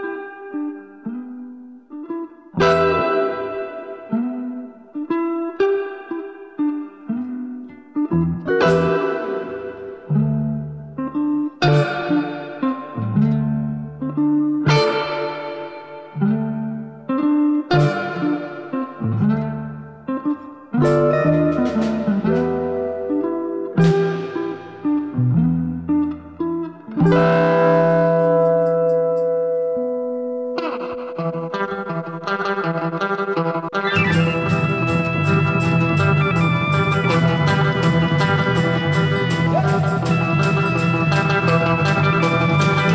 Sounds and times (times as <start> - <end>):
Punk rock: 33.9 - 42.9.